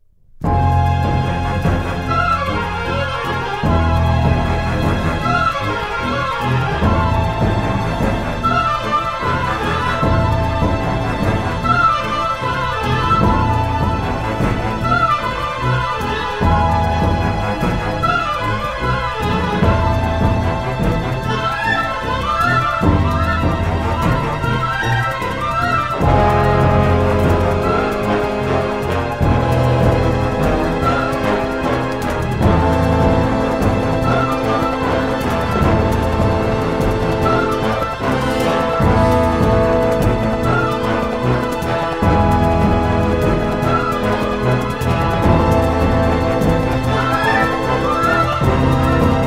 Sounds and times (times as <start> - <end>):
Background music: 0.2 - 49.2
Exciting music: 0.4 - 49.2
Soundtrack music: 0.4 - 49.2.